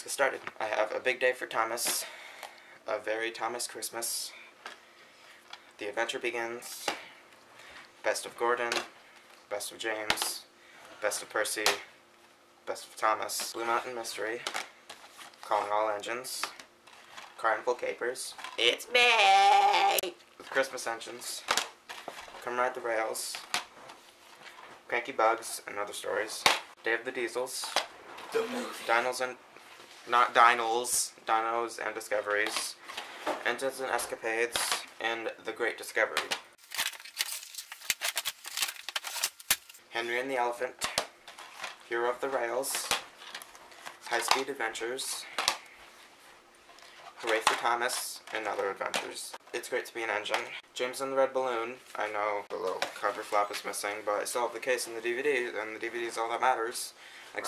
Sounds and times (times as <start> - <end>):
Speech: 0.0 - 2.1, 2.9 - 4.4, 5.8 - 7.0, 8.0 - 8.9, 9.5 - 11.9, 12.6 - 14.5, 15.4 - 16.6, 17.4 - 21.5, 22.4 - 23.5, 24.9 - 27.8, 28.4 - 29.4, 30.1 - 32.8, 33.4 - 36.4, 39.9 - 41.0, 41.9 - 43.0, 44.1 - 45.3, 47.2 - 57.4.